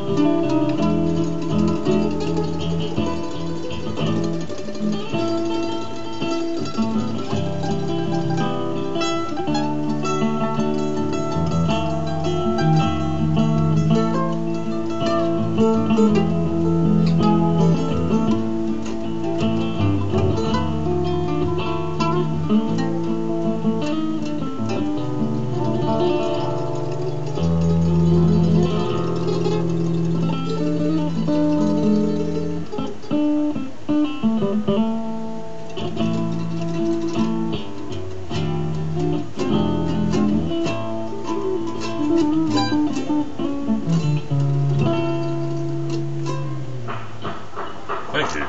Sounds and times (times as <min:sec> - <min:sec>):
Guitar: 0:00.0 - 0:48.4
Ukulele: 0:00.0 - 0:48.4.